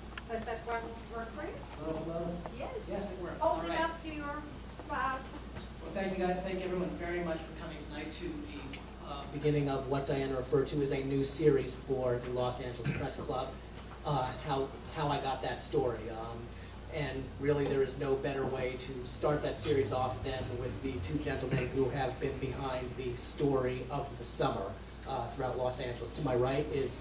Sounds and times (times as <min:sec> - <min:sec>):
Speech: 0:05.8 - 0:27.0.